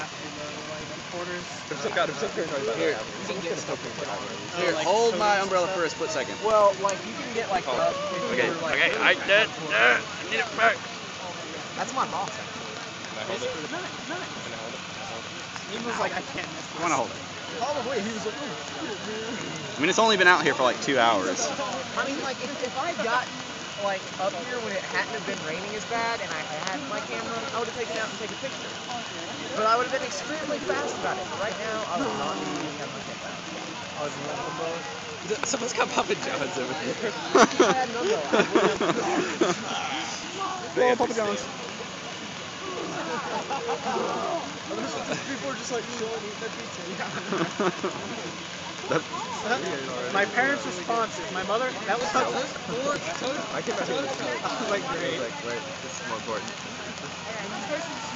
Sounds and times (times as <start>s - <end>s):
Outside, urban or manmade: 0.0s - 58.1s
Speech: 0.0s - 58.1s.